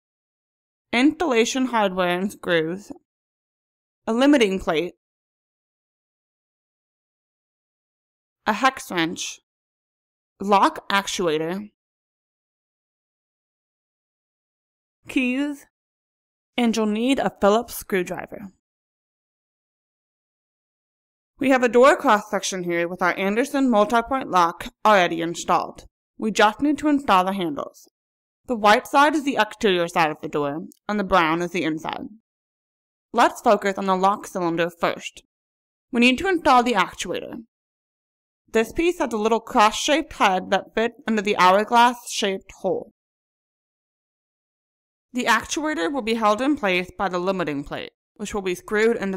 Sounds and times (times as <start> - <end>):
Speech: 1.0 - 3.0, 4.1 - 5.0, 8.5 - 9.4, 10.4 - 11.7, 15.1 - 15.7, 16.6 - 18.6, 21.4 - 27.9, 28.5 - 32.2, 33.2 - 35.2, 36.0 - 37.5, 38.6 - 42.9, 45.2 - 49.1.